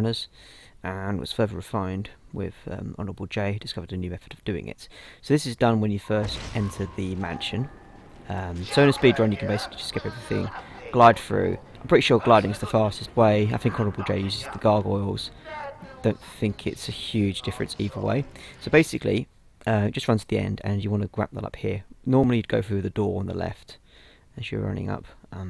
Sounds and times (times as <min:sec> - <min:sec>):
Speech: 0:00.0 - 0:07.7, 0:08.3 - 0:23.8, 0:24.4 - 0:25.4.